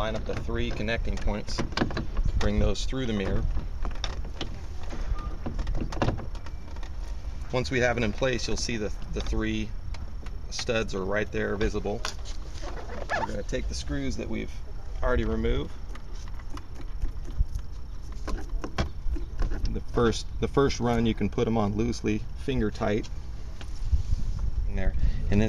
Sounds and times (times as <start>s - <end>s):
Speech: 0.0s - 1.6s, 2.4s - 3.4s, 7.5s - 9.7s, 10.5s - 12.1s, 13.1s - 15.7s, 19.7s - 23.1s, 24.7s - 25.4s.